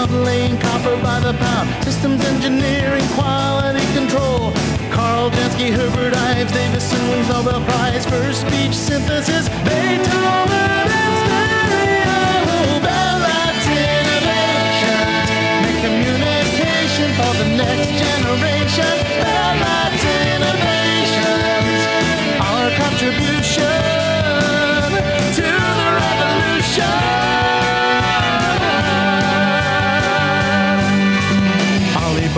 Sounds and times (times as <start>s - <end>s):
Music: 0.0s - 32.3s.